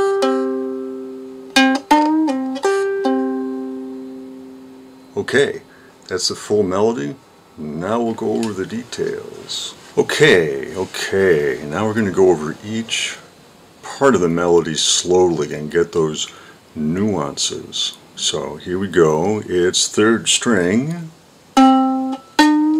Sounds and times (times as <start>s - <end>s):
Speech: 5.2s - 21.2s.